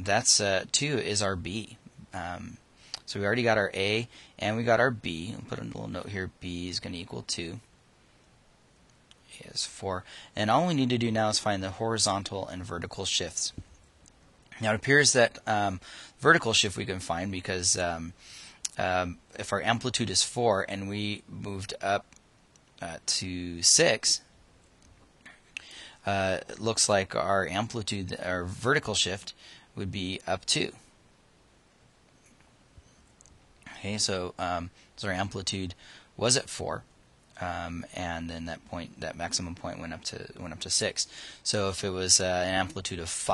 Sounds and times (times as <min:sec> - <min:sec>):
Speech: 0:00.0 - 0:07.7, 0:09.3 - 0:13.6, 0:14.6 - 0:22.1, 0:22.8 - 0:24.3, 0:26.0 - 0:30.8, 0:33.7 - 0:36.8, 0:37.4 - 0:43.3.